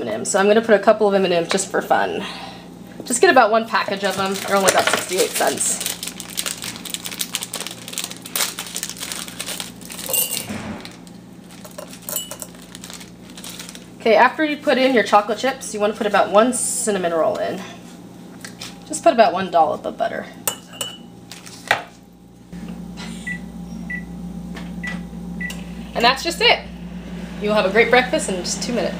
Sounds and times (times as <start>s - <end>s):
Speech: 0.0s - 2.2s, 3.0s - 5.8s, 14.0s - 17.8s, 18.9s - 20.4s, 26.0s - 26.7s, 27.4s - 28.9s.